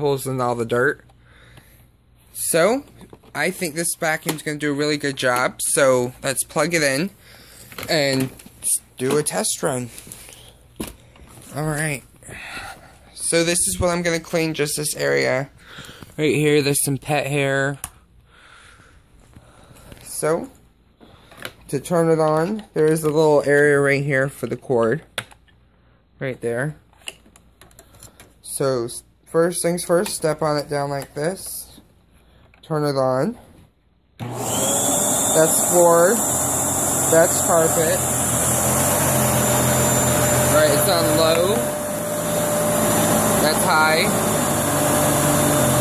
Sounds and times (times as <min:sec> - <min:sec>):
Vacuum cleaner: 0:34.2 - 0:45.8.